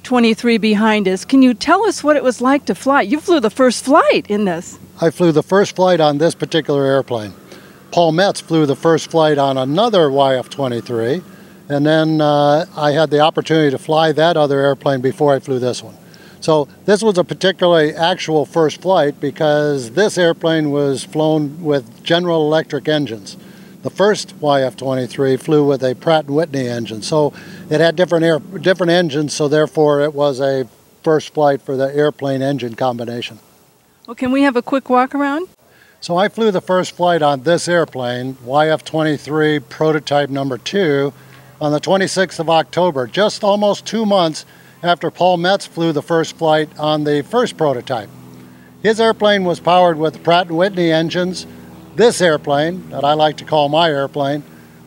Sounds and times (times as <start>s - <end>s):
Speech: 0.0s - 33.4s, 34.1s - 48.1s, 48.8s - 51.4s, 52.0s - 54.4s.